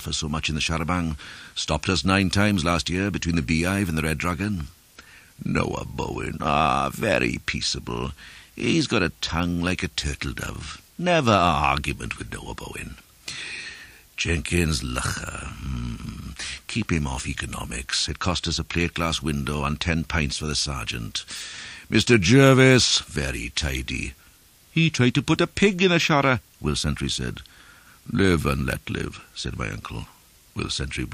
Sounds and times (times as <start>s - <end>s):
Narration, monologue: 0.0s - 31.1s.